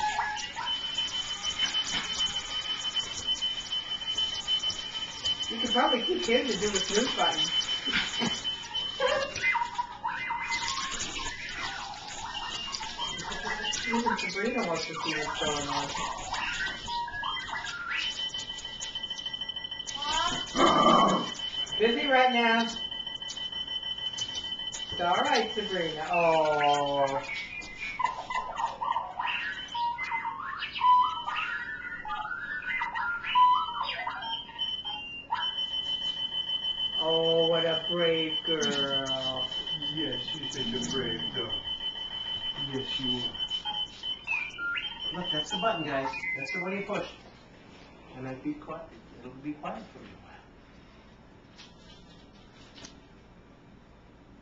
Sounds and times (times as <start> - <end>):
Alarm clock: 0.0 - 47.3
Speech: 5.5 - 7.5, 13.9 - 16.0, 25.0 - 27.3, 37.0 - 41.6
Dog: 27.8 - 30.4.